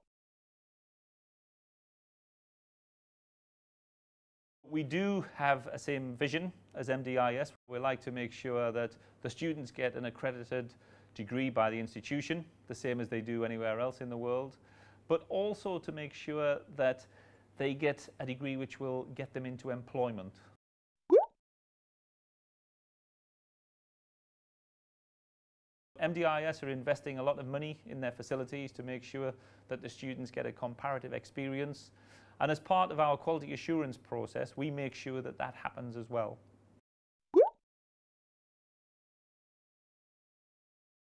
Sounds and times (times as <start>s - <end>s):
Speech: 4.7s - 20.5s, 26.0s - 36.4s.